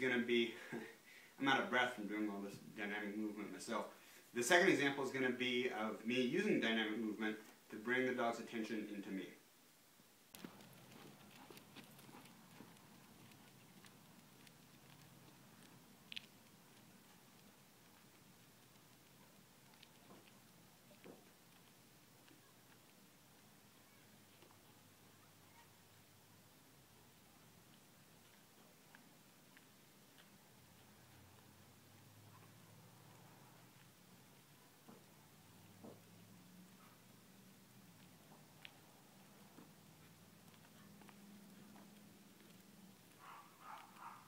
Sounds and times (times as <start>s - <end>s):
Speech: 0.0s - 9.4s.